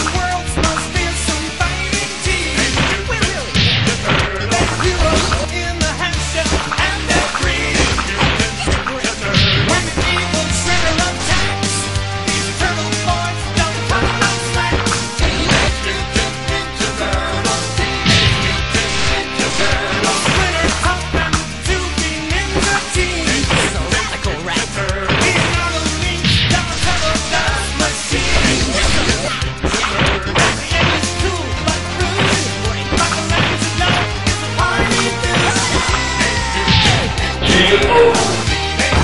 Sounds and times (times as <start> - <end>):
Music: 0.0 - 39.0.